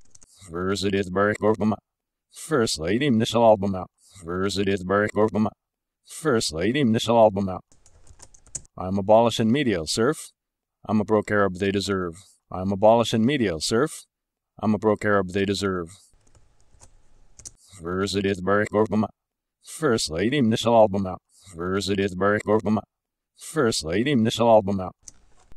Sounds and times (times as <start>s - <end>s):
Narration, monologue: 0.0s - 25.5s
Male speech, man speaking: 0.4s - 1.8s, 2.4s - 7.6s, 8.8s - 10.3s, 10.9s - 16.0s, 17.8s - 19.1s, 19.7s - 25.0s.